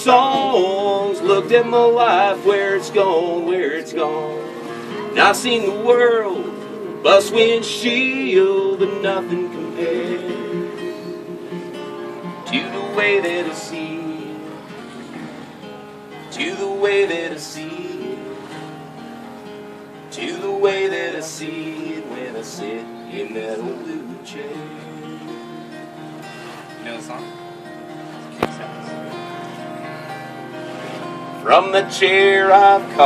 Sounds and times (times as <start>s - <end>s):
Strum: 0.0s - 33.0s.